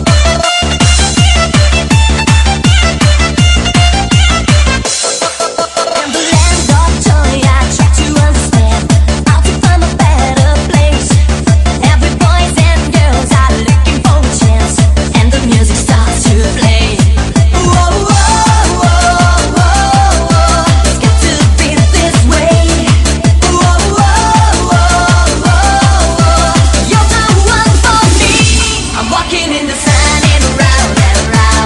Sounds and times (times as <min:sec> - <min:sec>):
Exciting music: 0:00.0 - 0:31.6.